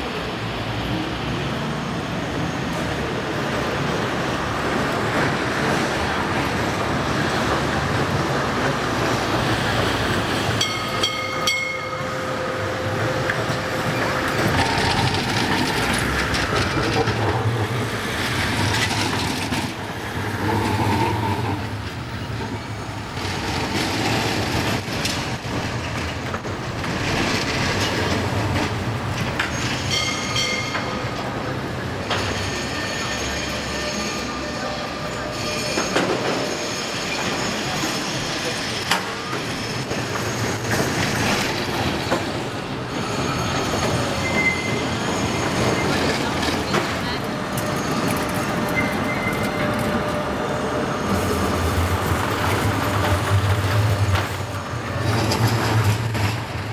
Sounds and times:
Railroad car, train wagon: 0.0s - 56.7s
Subway, metro, underground: 0.0s - 56.7s
Train: 0.0s - 56.7s.

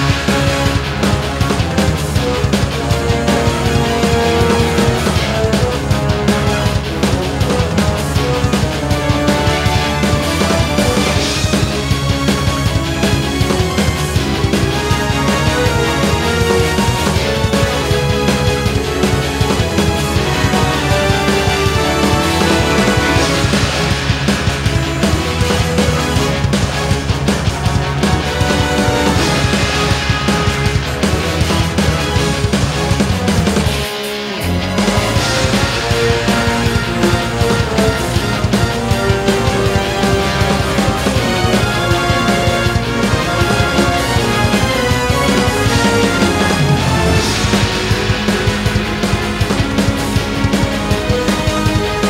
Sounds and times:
Theme music: 0.0s - 52.1s.

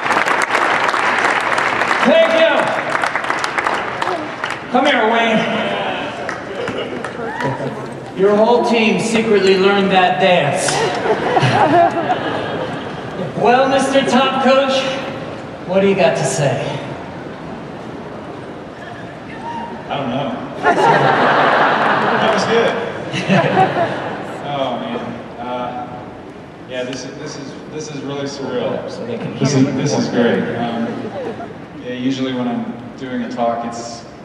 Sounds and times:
Male speech, man speaking: 2.0s - 2.8s, 4.8s - 6.2s, 8.2s - 10.8s, 13.4s - 17.0s, 19.9s - 20.4s, 22.2s - 22.9s, 24.4s - 26.0s, 26.7s - 31.0s, 31.8s - 34.1s.

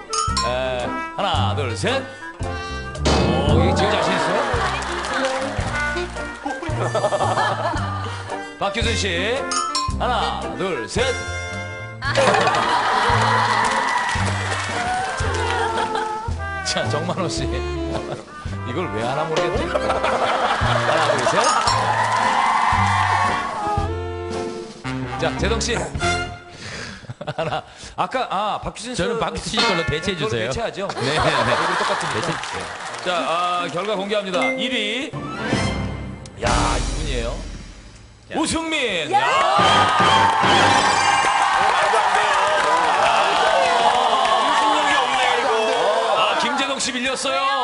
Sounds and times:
Music: 0.0s - 45.4s.

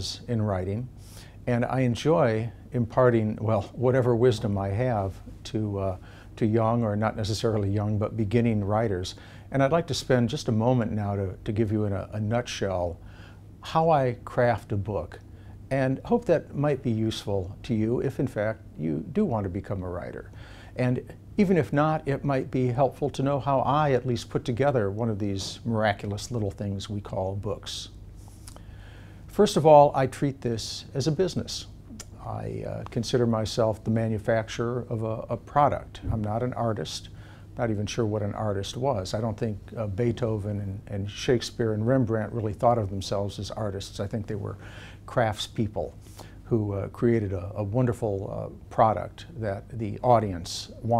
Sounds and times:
Speech: 0.0s - 13.0s, 13.6s - 28.0s, 29.3s - 51.0s.

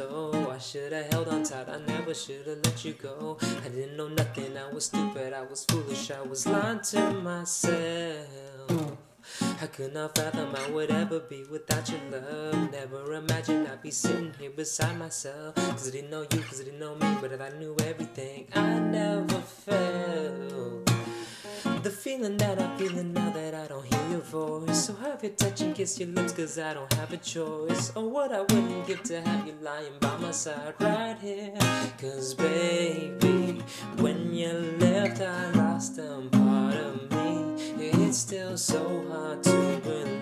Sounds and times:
Acoustic guitar: 0.0s - 40.2s.

